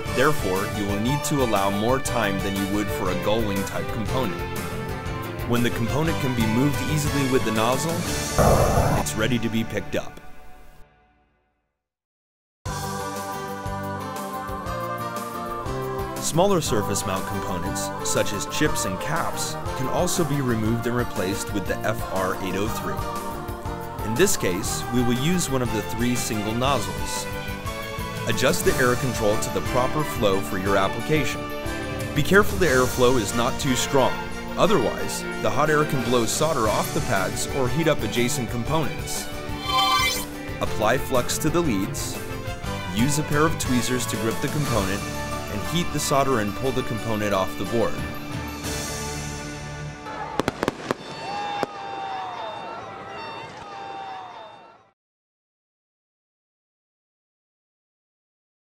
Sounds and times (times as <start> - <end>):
Music: 0.0 - 11.8, 12.7 - 50.4
Speech: 0.1 - 4.4, 5.4 - 10.2, 16.2 - 23.0, 24.0 - 27.3, 28.3 - 31.4, 32.2 - 39.2, 40.6 - 42.2, 42.8 - 48.1
Fireworks: 50.0 - 52.0.